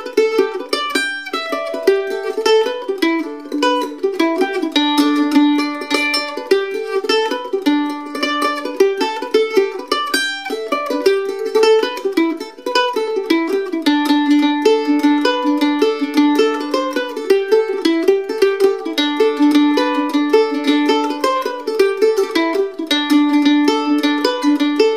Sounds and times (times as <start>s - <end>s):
Guitar: 0.0s - 24.9s
Mandolin: 0.0s - 24.9s.